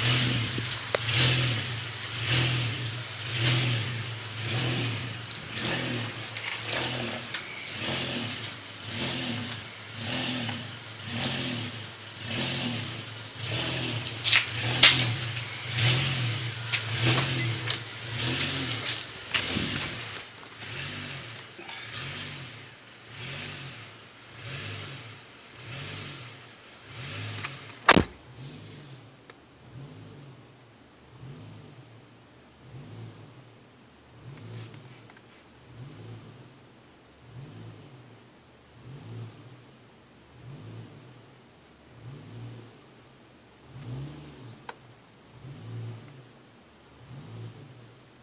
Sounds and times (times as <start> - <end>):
Car: 0.0 - 48.2.